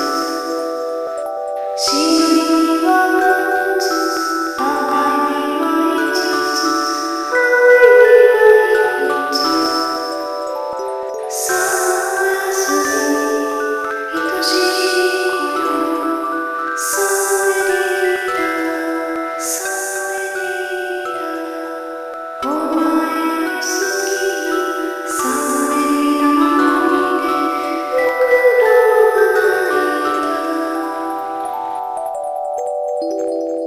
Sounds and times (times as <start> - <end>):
Lullaby: 0.0 - 33.6.